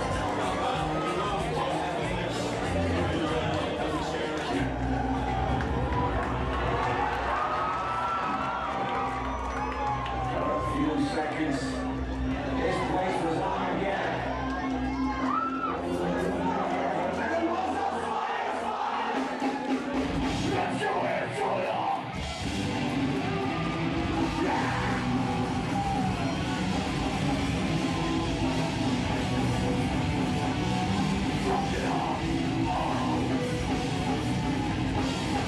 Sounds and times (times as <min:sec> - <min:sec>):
Speech: 0:00.0 - 0:04.8, 0:10.3 - 0:14.6, 0:15.8 - 0:18.8, 0:20.4 - 0:22.1.